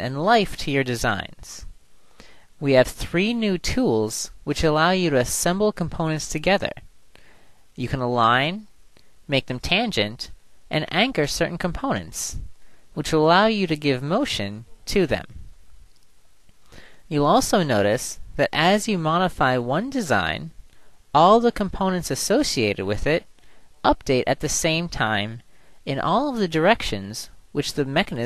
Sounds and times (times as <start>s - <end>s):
Speech: 0.0s - 1.7s, 2.6s - 6.9s, 7.8s - 8.7s, 9.3s - 15.4s, 17.1s - 28.2s.